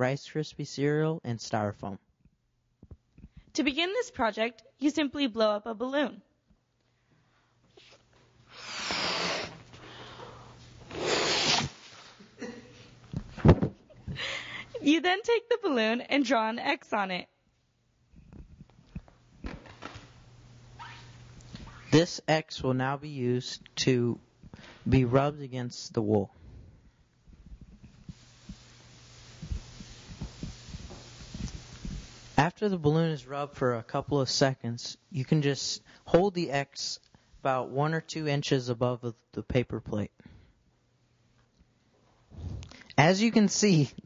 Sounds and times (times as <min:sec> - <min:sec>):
Speech: 0:00.0 - 0:02.0, 0:03.6 - 0:06.2, 0:14.8 - 0:17.3, 0:22.0 - 0:24.2, 0:24.9 - 0:26.4, 0:32.4 - 0:40.2, 0:43.0 - 0:44.0.